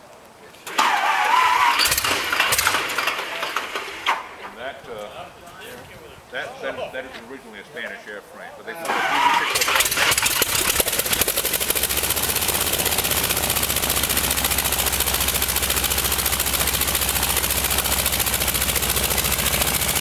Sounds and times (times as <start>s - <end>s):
Engine: 0.6s - 4.6s, 8.8s - 20.0s.